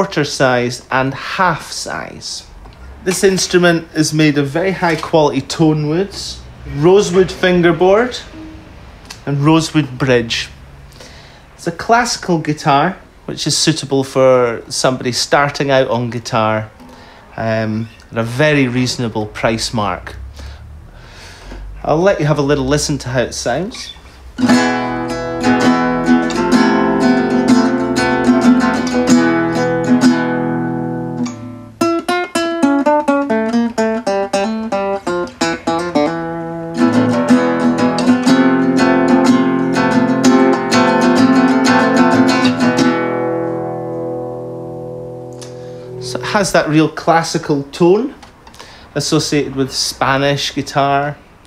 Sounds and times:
Speech: 0.0s - 8.4s, 9.1s - 10.6s, 11.6s - 16.8s, 17.4s - 20.3s, 21.8s - 24.0s, 46.0s - 48.2s, 49.0s - 51.2s
Strum: 0.7s - 11.6s, 16.7s - 48.8s.

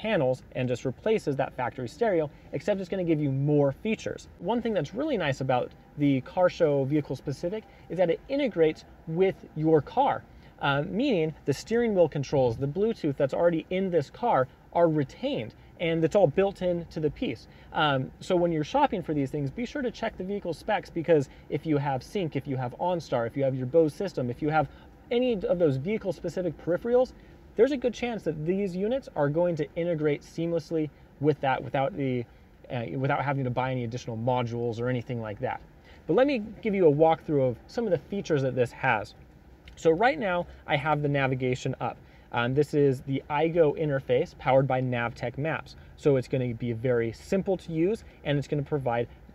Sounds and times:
Speech: 0.0s - 49.3s.

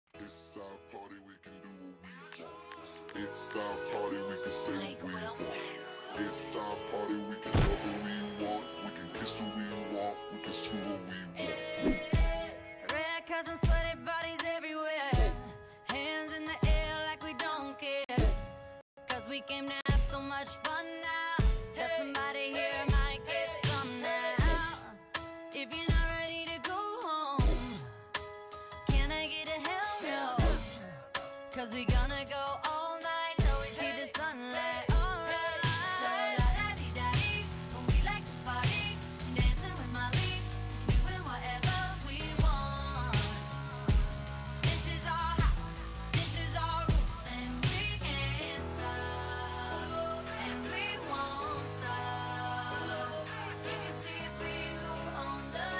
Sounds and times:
Music: 0.1s - 55.7s
Singing: 0.5s - 18.4s, 19.1s - 25.0s, 28.9s - 44.0s, 44.6s - 55.7s.

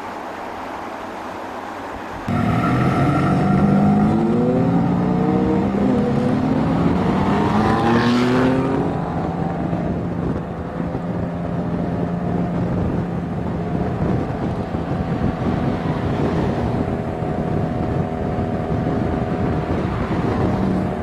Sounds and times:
Outside, urban or manmade: 0.0s - 21.0s
Race car, auto racing: 0.3s - 21.0s.

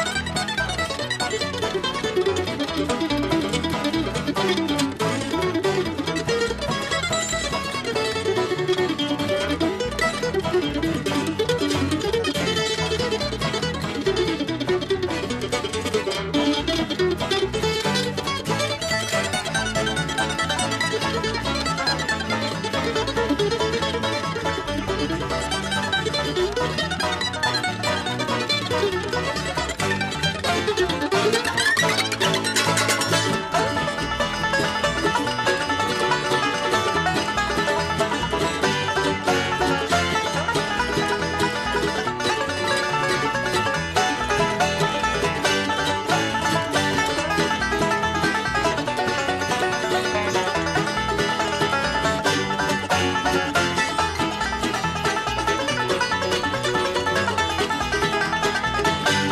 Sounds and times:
Bluegrass: 0.0s - 59.3s.

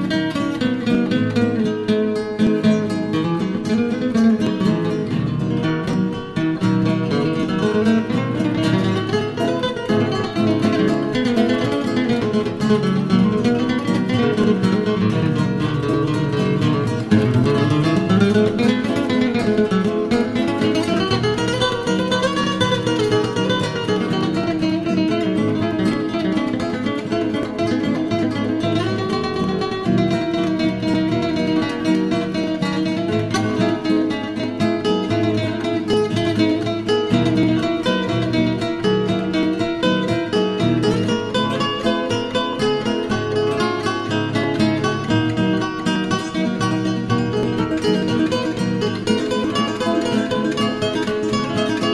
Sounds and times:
Flamenco: 0.0s - 51.9s.

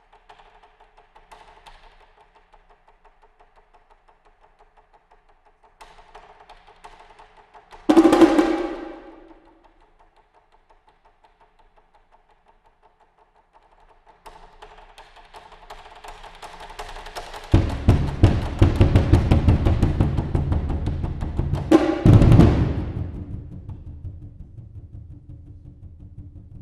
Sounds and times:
Wood block: 7.7s - 9.5s, 16.2s - 23.9s.

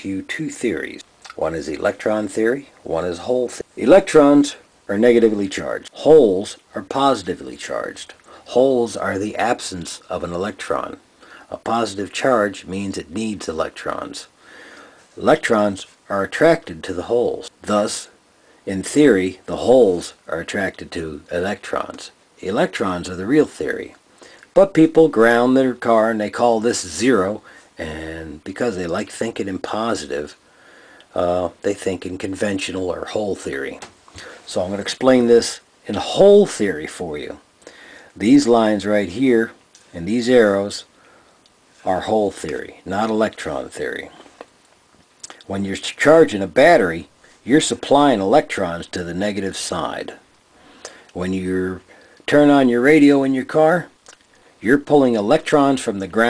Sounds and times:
Speech: 0.0s - 14.3s, 15.2s - 30.4s, 31.1s - 37.5s, 38.2s - 40.9s, 41.8s - 44.4s, 45.2s - 50.2s, 51.1s - 56.2s.

